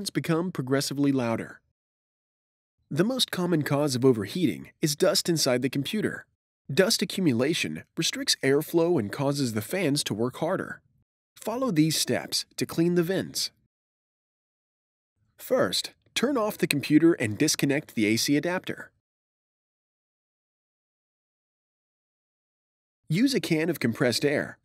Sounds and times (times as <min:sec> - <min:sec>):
Speech: 0:00.0 - 0:01.6, 0:02.9 - 0:10.8, 0:11.4 - 0:13.6, 0:15.4 - 0:19.0, 0:23.1 - 0:24.6.